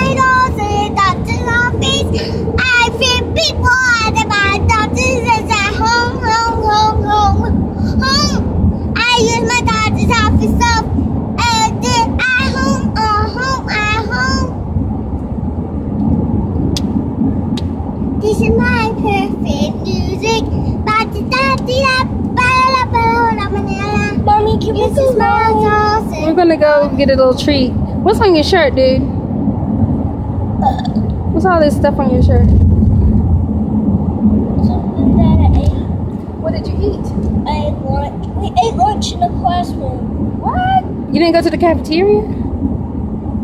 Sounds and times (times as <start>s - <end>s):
Outside, rural or natural: 0.0s - 43.4s
Child speech, kid speaking: 22.6s - 27.0s, 34.6s - 35.8s, 36.4s - 41.4s.